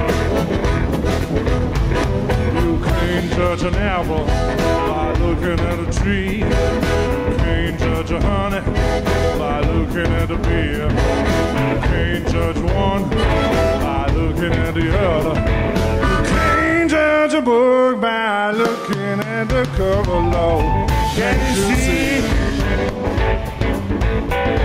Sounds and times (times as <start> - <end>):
Guitar: 0.0 - 24.6
Ska: 0.0 - 24.6
Song: 0.0 - 24.6
Singing: 16.1 - 22.7.